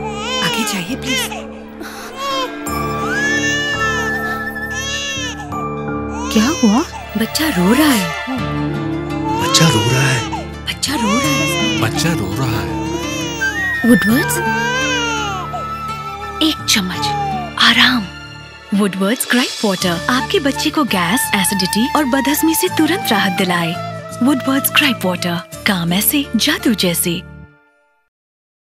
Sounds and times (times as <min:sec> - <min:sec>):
Music: 0:00.0 - 0:28.1
Speech: 0:10.9 - 0:12.7, 0:18.7 - 0:27.2.